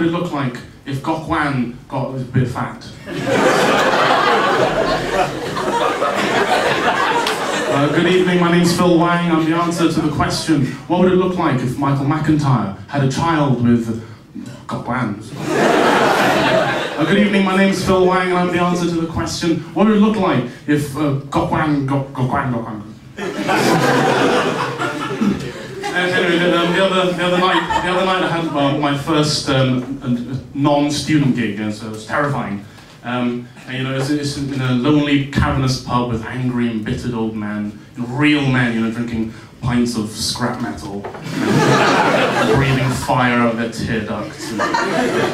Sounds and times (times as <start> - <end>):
Speech: 0.0 - 3.0, 7.6 - 15.4, 17.0 - 23.0, 25.8 - 41.2, 42.3 - 45.0.